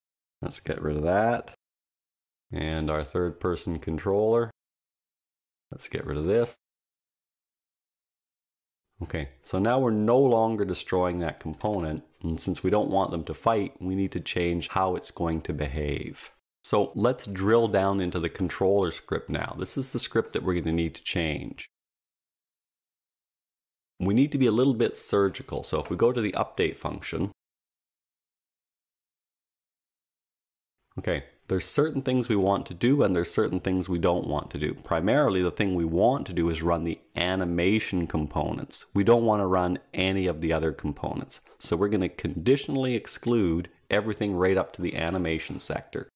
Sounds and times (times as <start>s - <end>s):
Speech: 0.4s - 1.6s, 2.5s - 4.6s, 5.7s - 6.6s, 9.0s - 21.7s, 24.0s - 27.4s, 31.0s - 46.1s.